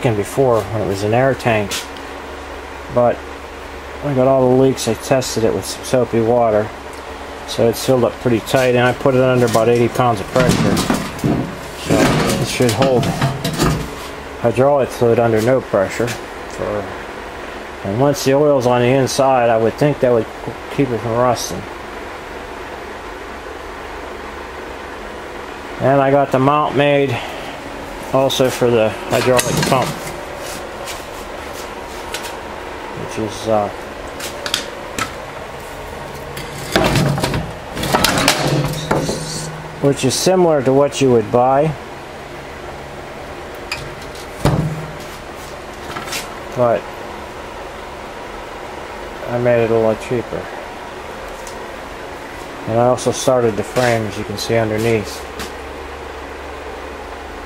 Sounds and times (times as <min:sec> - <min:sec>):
Speech: 0:00.0 - 0:01.9, 0:02.9 - 0:03.2, 0:04.0 - 0:06.8, 0:07.5 - 0:11.0, 0:11.8 - 0:13.3, 0:14.4 - 0:17.0, 0:17.8 - 0:21.7, 0:25.8 - 0:27.3, 0:28.1 - 0:30.0, 0:33.0 - 0:33.8, 0:38.4 - 0:41.8, 0:46.6 - 0:46.9, 0:49.2 - 0:50.6, 0:52.7 - 0:55.3.